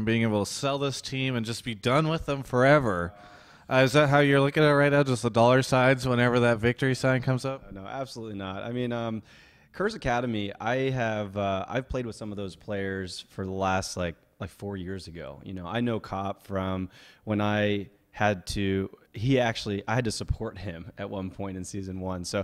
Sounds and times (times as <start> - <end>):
Speech: 0.0 - 22.4.